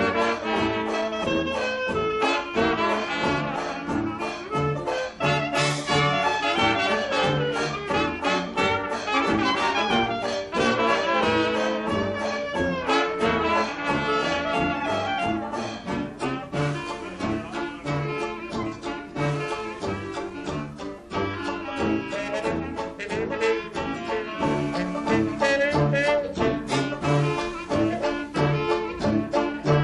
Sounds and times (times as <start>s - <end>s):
Jazz: 0.0s - 29.8s
Orchestra: 0.0s - 29.8s.